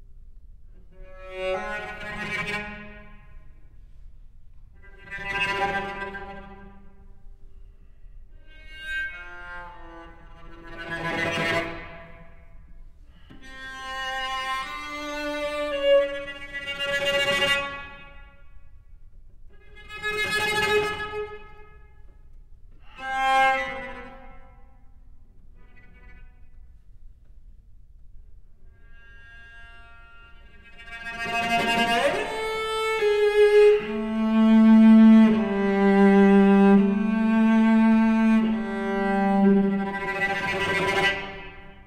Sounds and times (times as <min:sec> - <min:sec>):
Cello: 0:00.0 - 0:41.8.